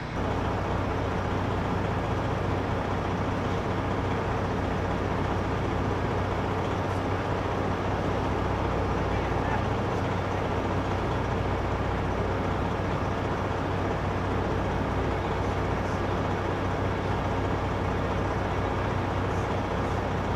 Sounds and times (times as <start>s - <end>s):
Speech: 9.0s - 10.6s.